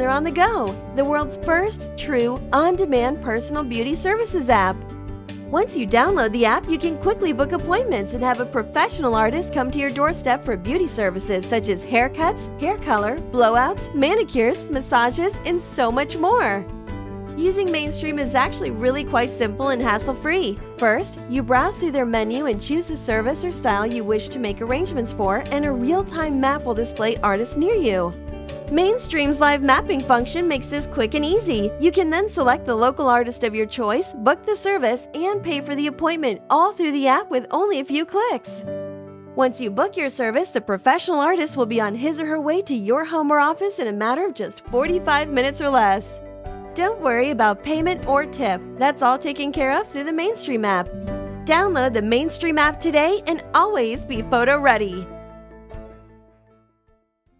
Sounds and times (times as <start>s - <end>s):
Speech: 0.0s - 4.8s, 5.6s - 16.6s, 17.4s - 28.1s, 28.7s - 38.6s, 39.4s - 46.2s, 46.8s - 50.9s, 51.5s - 55.1s
Music: 0.0s - 57.3s.